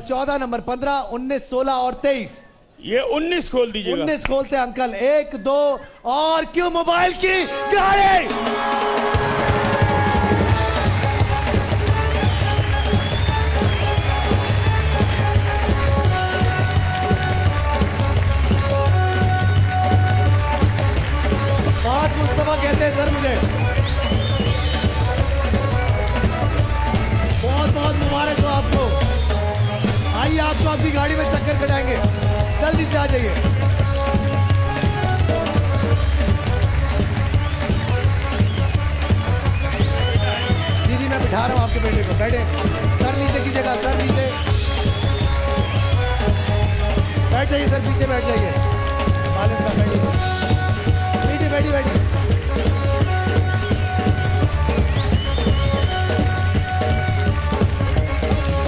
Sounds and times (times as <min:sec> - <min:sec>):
Music: 0:06.1 - 0:58.6
Speech: 0:21.8 - 0:23.5, 0:27.4 - 0:29.0, 0:40.8 - 0:44.4, 0:47.3 - 0:48.6, 0:49.4 - 0:50.2, 0:51.2 - 0:52.0.